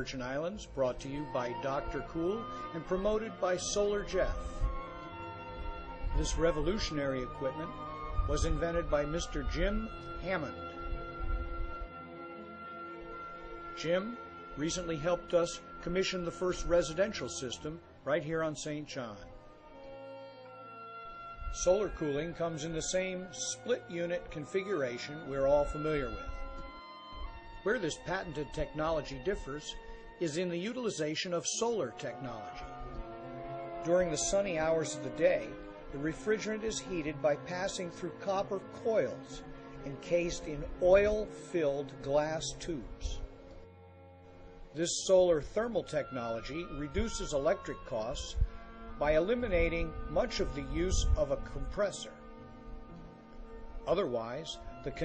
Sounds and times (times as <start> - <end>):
Speech: 0.0 - 4.5, 6.2 - 10.6, 13.8 - 19.3, 21.6 - 26.3, 27.7 - 32.7, 33.8 - 43.2, 44.8 - 48.4, 49.0 - 52.2, 53.9 - 55.0
Music: 0.0 - 55.0.